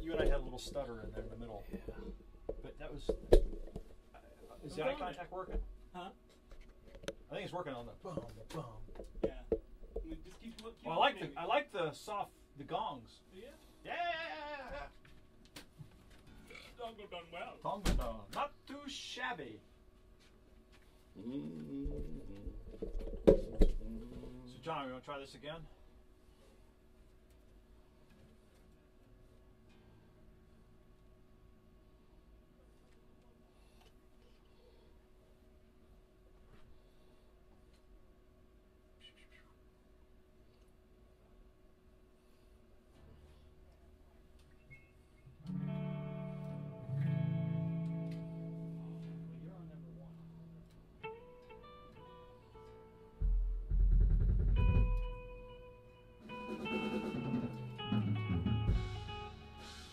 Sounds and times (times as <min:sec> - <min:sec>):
Speech: 0:00.0 - 0:03.1, 0:07.3 - 0:15.0, 0:16.5 - 0:19.6, 0:23.9 - 0:25.7, 0:49.3 - 0:50.4.